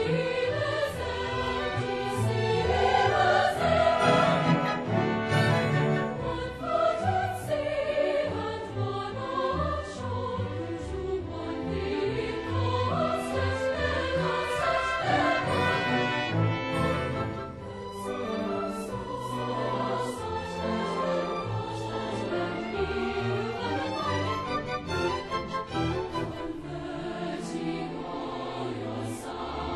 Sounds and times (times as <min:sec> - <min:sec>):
Choir: 0:00.0 - 0:29.7.